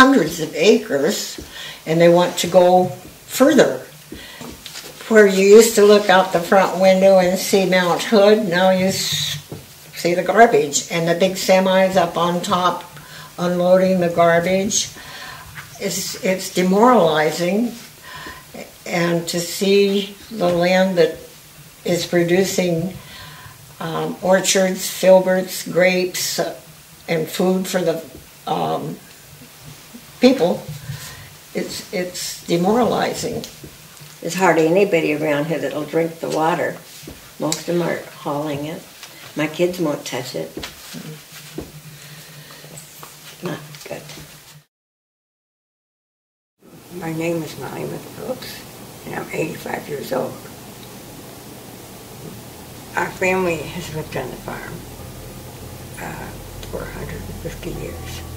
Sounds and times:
Speech: 0:00.0 - 0:03.9, 0:05.0 - 0:15.0, 0:15.7 - 0:17.9, 0:18.5 - 0:23.0, 0:23.8 - 0:29.1, 0:30.2 - 0:30.8, 0:31.5 - 0:33.6, 0:34.2 - 0:41.2, 0:43.4 - 0:44.2, 0:46.7 - 0:50.5, 0:52.9 - 0:54.9, 0:55.9 - 0:58.3
Inside, small room: 0:00.0 - 0:44.7, 0:46.6 - 0:58.3.

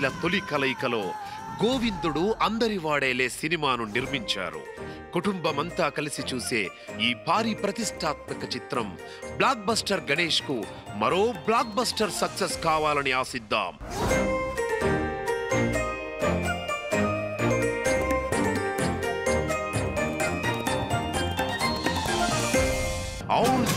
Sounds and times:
Music: 0:00.0 - 0:23.7.

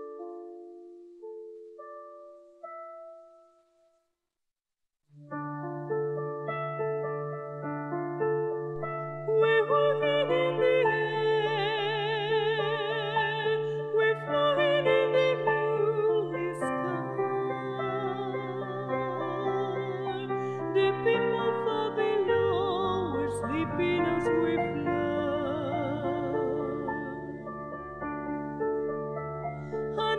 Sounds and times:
Lullaby: 0:00.0 - 0:04.0, 0:05.6 - 0:30.1
New-age music: 0:00.0 - 0:04.0, 0:05.2 - 0:30.1.

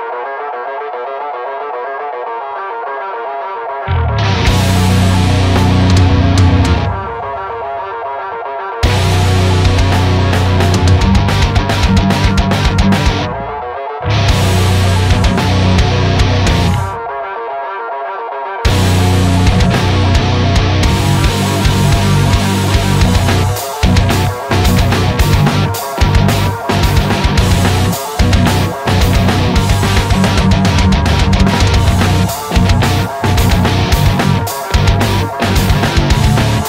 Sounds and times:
Music: 0:00.0 - 0:36.6.

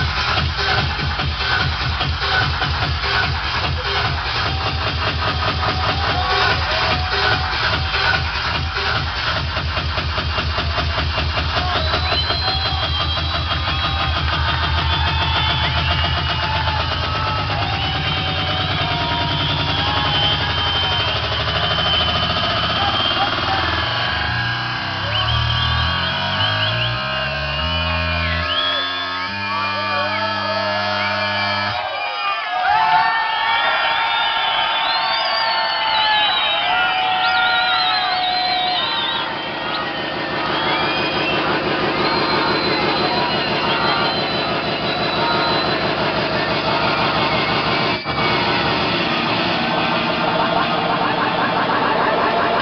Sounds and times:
Techno: 0:00.0 - 0:52.6.

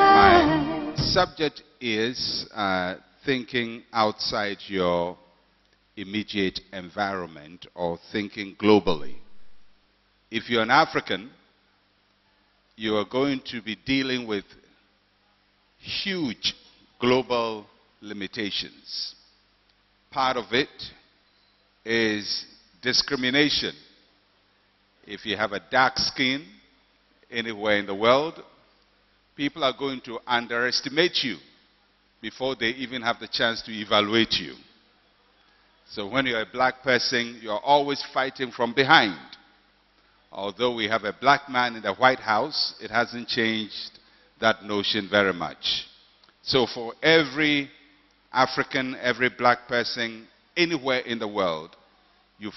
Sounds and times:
Speech: 0:01.0 - 0:05.2, 0:06.0 - 0:09.2, 0:10.3 - 0:11.4, 0:12.8 - 0:14.6, 0:15.8 - 0:19.2, 0:20.1 - 0:21.0, 0:21.9 - 0:23.8, 0:25.0 - 0:26.5, 0:27.3 - 0:28.5, 0:29.4 - 0:31.5, 0:32.2 - 0:34.8, 0:35.8 - 0:39.4, 0:40.3 - 0:47.7, 0:48.3 - 0:51.8.

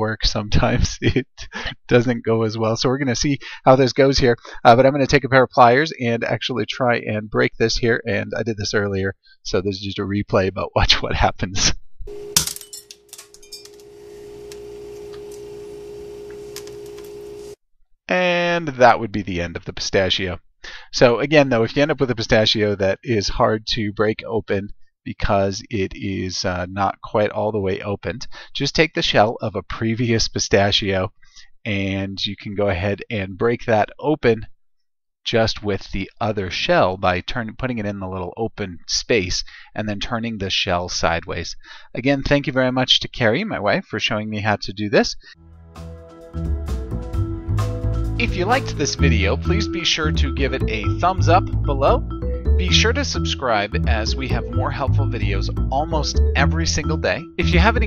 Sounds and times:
Speech: 0:00.0 - 0:11.8, 0:18.1 - 0:34.5, 0:35.2 - 0:45.4, 0:48.2 - 0:52.0, 0:52.6 - 0:57.8.

